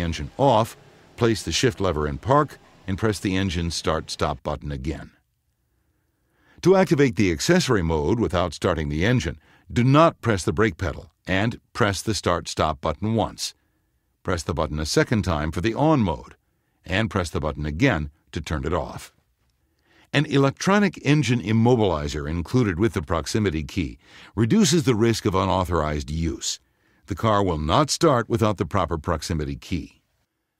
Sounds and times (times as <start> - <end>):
Speech: 0.0 - 5.2, 6.6 - 13.6, 14.2 - 19.2, 20.1 - 30.0.